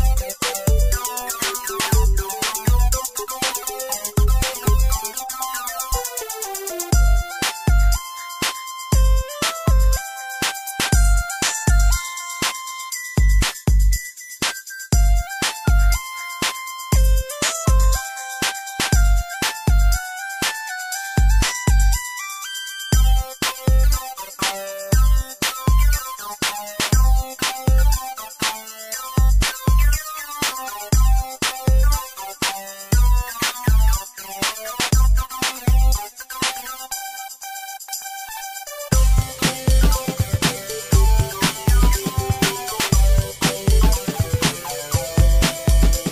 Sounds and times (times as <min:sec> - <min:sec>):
Music: 0:00.0 - 0:46.1.